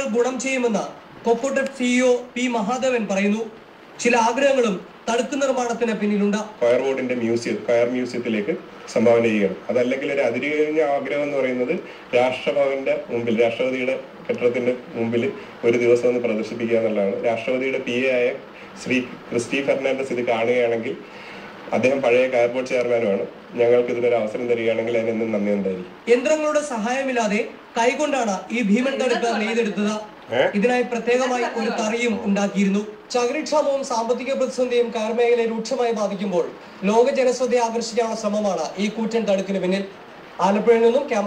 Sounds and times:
Speech: 21.7s - 41.2s.

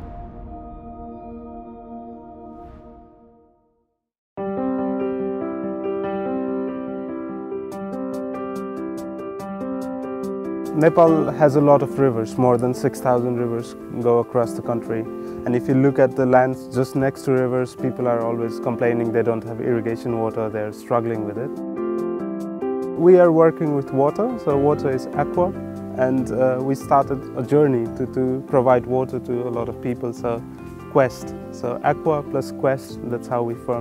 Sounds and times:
Music: 0.0s - 33.8s
Speech: 10.7s - 21.5s, 23.0s - 30.4s, 31.0s - 33.8s.

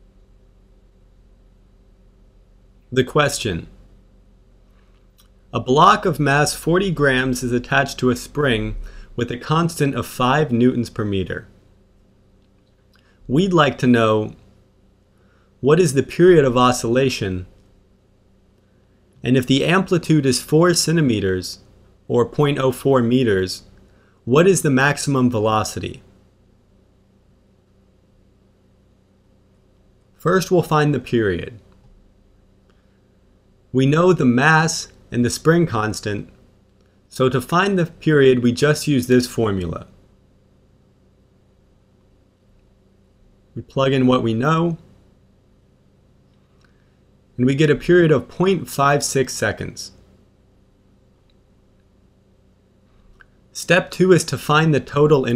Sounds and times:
Speech: 2.9s - 3.8s, 5.5s - 11.6s, 13.3s - 14.4s, 15.6s - 17.6s, 19.2s - 26.1s, 30.2s - 31.7s, 33.7s - 36.4s, 37.1s - 40.0s, 43.6s - 44.9s, 47.4s - 50.0s, 53.5s - 55.3s.

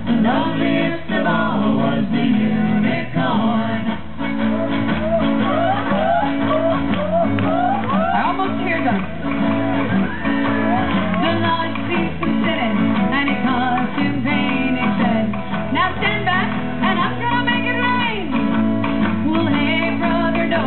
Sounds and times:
Music: 0.0s - 20.6s
Female singing: 7.6s - 9.1s, 10.7s - 18.4s, 19.2s - 20.6s.

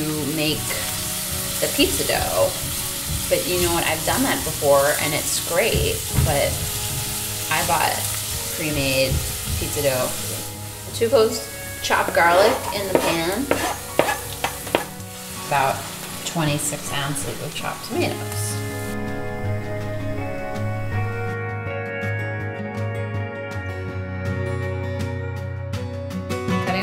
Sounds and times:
Speech: 0.0s - 0.8s, 3.3s - 6.6s, 7.5s - 8.0s, 8.6s - 10.2s, 15.5s - 18.6s, 26.6s - 26.8s
Music: 0.0s - 26.8s.

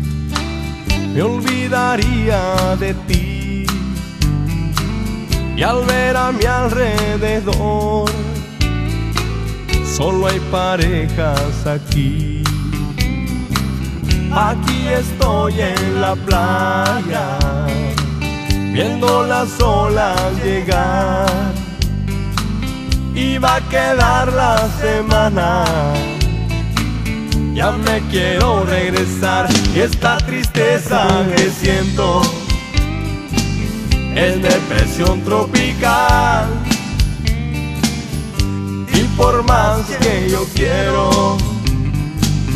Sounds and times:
Funk: 0.0s - 42.5s
Jazz: 0.0s - 42.5s.

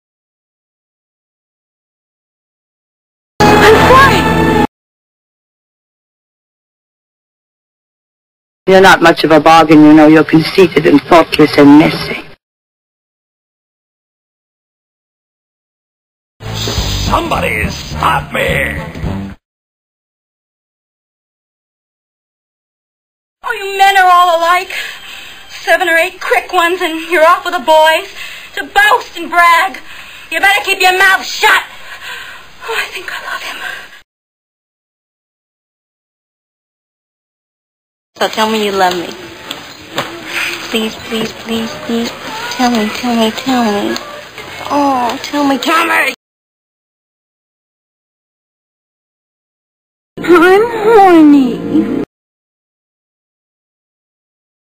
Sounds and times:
Music: 3.4s - 4.7s, 16.4s - 19.4s
Speech: 8.7s - 12.4s, 17.0s - 18.9s.

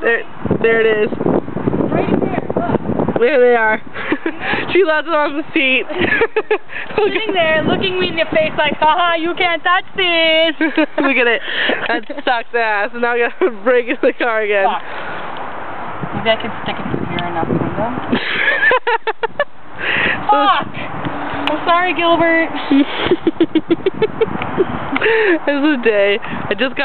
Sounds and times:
Vehicle: 0.0s - 26.8s.

